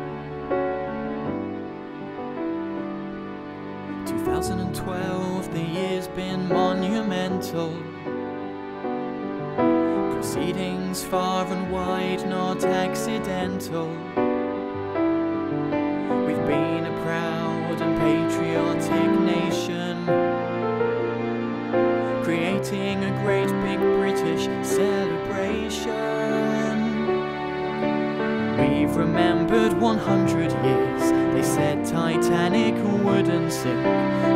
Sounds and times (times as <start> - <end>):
Wedding music: 0.0 - 34.3.